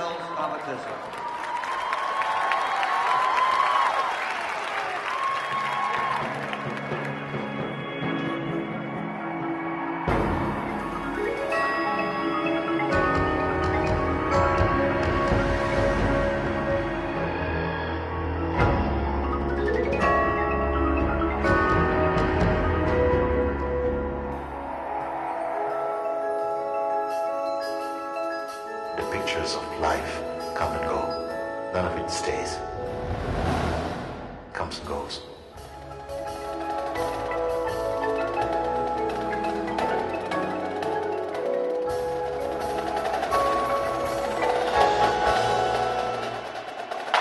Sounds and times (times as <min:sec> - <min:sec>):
Speech: 0:00.0 - 0:01.0, 0:29.0 - 0:31.2, 0:31.8 - 0:32.6, 0:34.5 - 0:35.4
Music: 0:01.8 - 0:47.2.